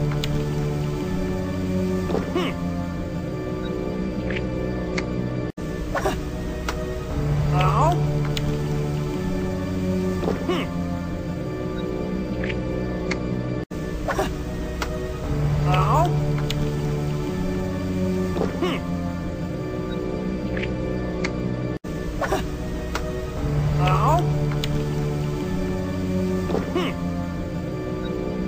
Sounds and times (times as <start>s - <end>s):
Music: 0.0s - 28.4s.